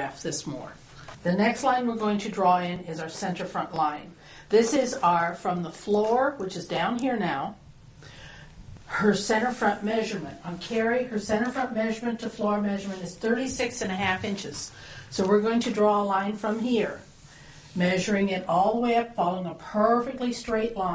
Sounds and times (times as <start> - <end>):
Speech: 0.0 - 7.6, 8.9 - 17.1, 17.8 - 20.9.